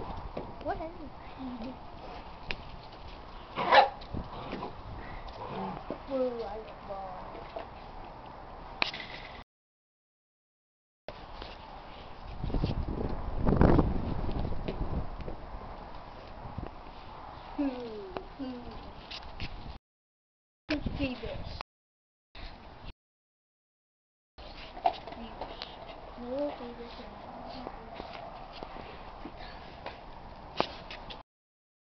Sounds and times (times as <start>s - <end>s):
Speech: 6.0s - 7.4s, 20.7s - 21.6s, 26.2s - 28.1s.